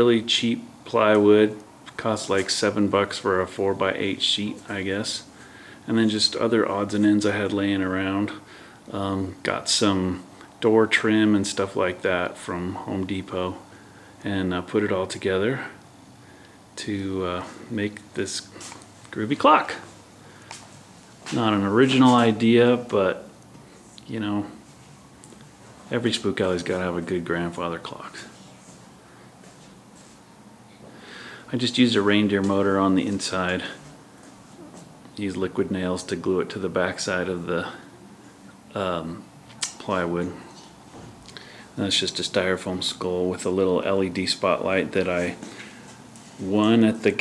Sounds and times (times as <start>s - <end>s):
Speech: 0.0s - 15.8s, 16.8s - 20.0s, 21.3s - 23.3s, 24.0s - 24.6s, 25.9s - 28.5s, 31.5s - 33.9s, 34.6s - 37.9s, 38.7s - 40.6s, 41.8s - 45.5s, 46.4s - 47.2s.